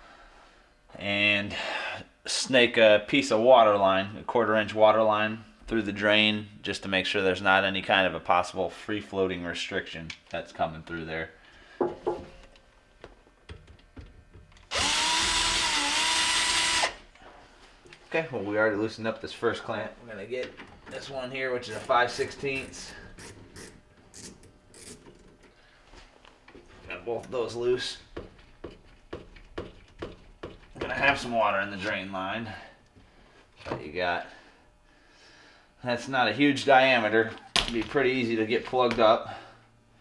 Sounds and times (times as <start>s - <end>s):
Speech: 1.0s - 1.6s, 2.3s - 11.4s, 18.1s - 23.0s, 26.8s - 28.1s, 30.8s - 32.8s, 33.7s - 34.4s, 35.8s - 39.4s
Blender: 14.7s - 17.0s.